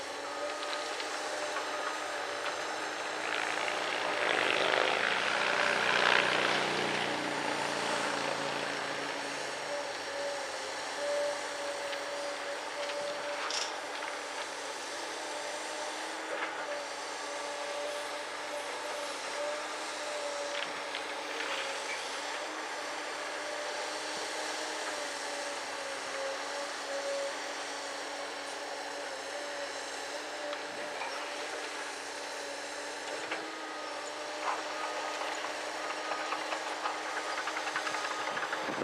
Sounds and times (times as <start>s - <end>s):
Outside, urban or manmade: 0.0s - 38.8s
Vehicle: 0.0s - 38.8s.